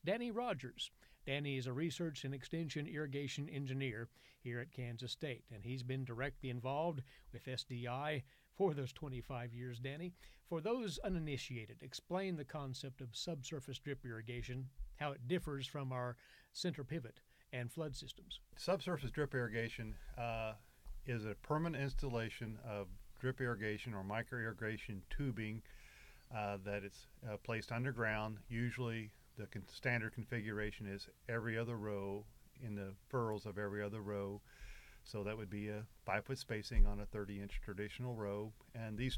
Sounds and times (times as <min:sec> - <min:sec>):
Speech: 0:00.0 - 0:25.7, 0:26.3 - 0:34.4, 0:35.1 - 0:39.1.